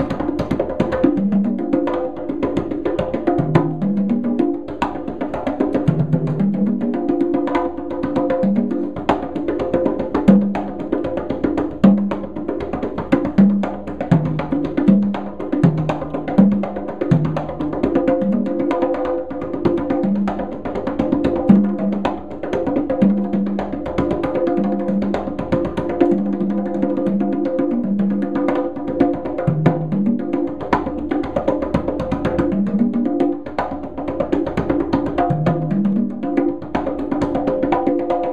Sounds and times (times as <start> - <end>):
Percussion: 0.0 - 38.3.